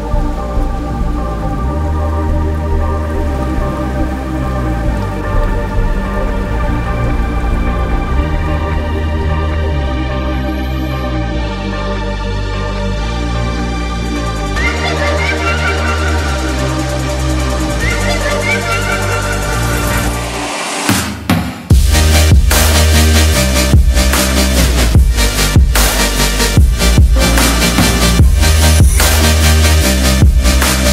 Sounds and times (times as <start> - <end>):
Music: 0.0 - 30.9.